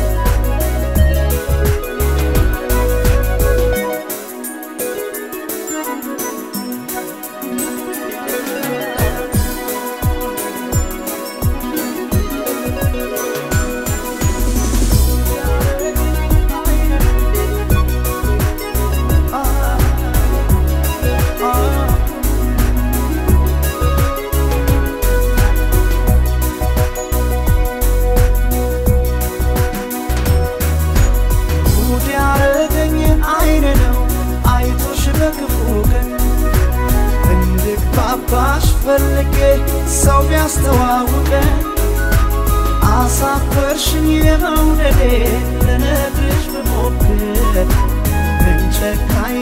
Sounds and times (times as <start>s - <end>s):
Music: 0.0s - 49.4s.